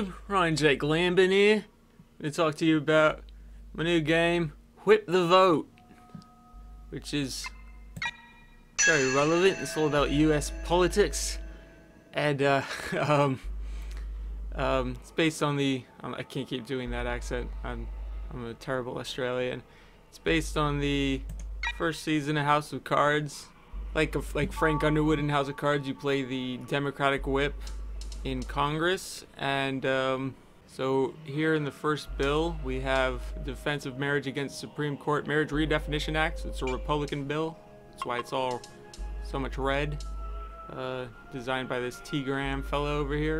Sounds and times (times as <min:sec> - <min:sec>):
Speech: 0:00.0 - 0:03.2, 0:03.8 - 0:05.7, 0:06.9 - 0:07.5, 0:08.8 - 0:11.4, 0:12.2 - 0:13.4, 0:14.6 - 0:19.6, 0:20.2 - 0:27.6, 0:28.3 - 0:38.6, 0:39.2 - 0:40.0, 0:40.7 - 0:43.3
Music: 0:05.5 - 0:21.8, 0:23.5 - 0:28.9, 0:31.2 - 0:43.3.